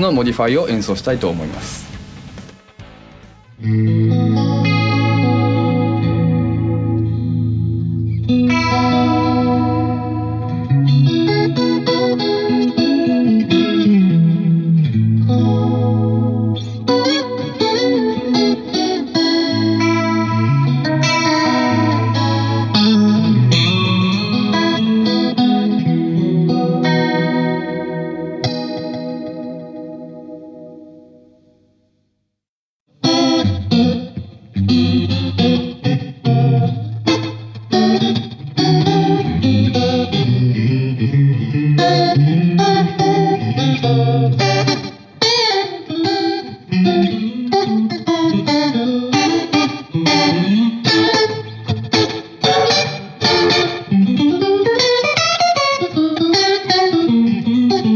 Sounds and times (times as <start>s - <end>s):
Echo: 0.0s - 5.7s
Bass guitar: 0.0s - 29.0s, 33.1s - 45.1s
Effects unit: 0.0s - 57.9s.